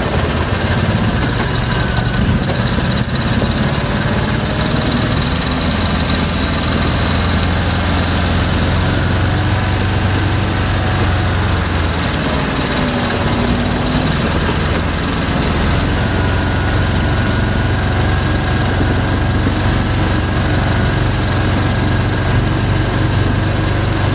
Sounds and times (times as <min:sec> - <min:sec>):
Vehicle: 0:00.0 - 0:24.1.